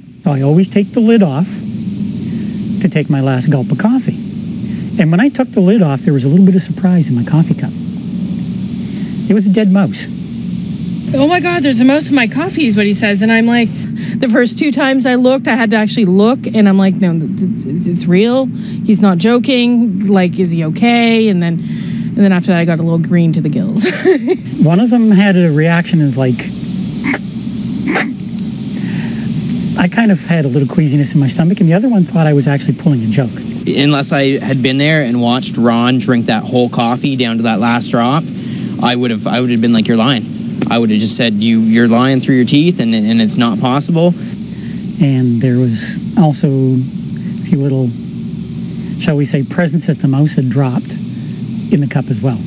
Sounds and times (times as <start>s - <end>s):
Speech: 24.6s - 26.5s, 29.8s - 44.2s, 45.0s - 48.0s, 51.7s - 52.4s.